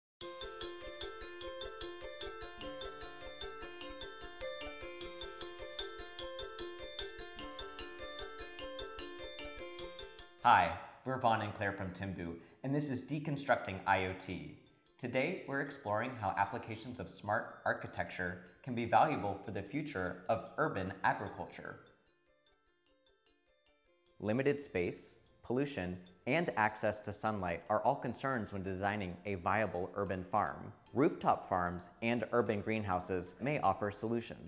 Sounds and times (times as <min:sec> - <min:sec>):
Glockenspiel: 0:00.2 - 0:10.5, 0:11.5 - 0:34.1.